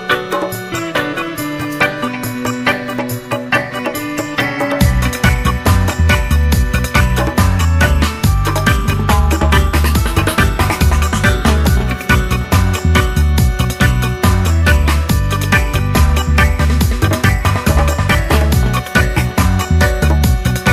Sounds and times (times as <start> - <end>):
Music: 0.0 - 20.7.